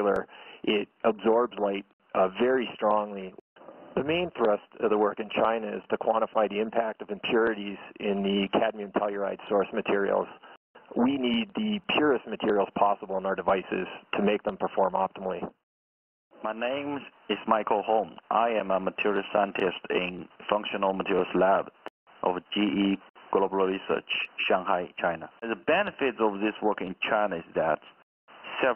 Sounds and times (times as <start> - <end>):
Speech: 0.0 - 3.4, 4.0 - 15.6, 16.4 - 28.7.